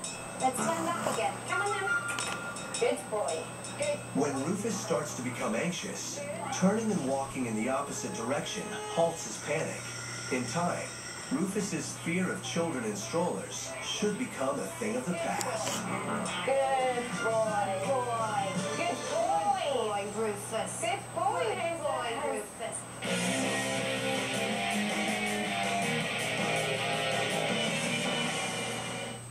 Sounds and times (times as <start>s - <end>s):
Music: 0.0s - 29.3s
Speech: 2.9s - 15.8s.